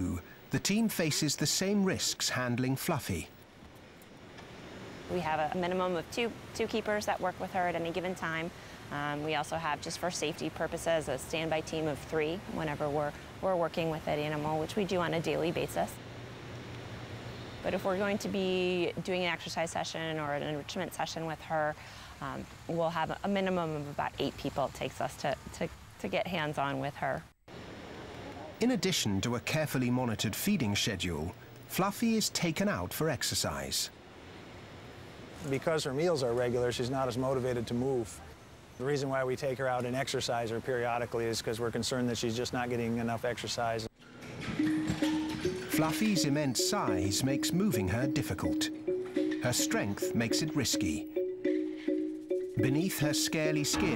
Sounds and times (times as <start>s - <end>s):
Speech: 0.0s - 3.3s, 28.3s - 33.9s, 45.8s - 48.7s, 49.5s - 51.1s, 52.6s - 53.9s.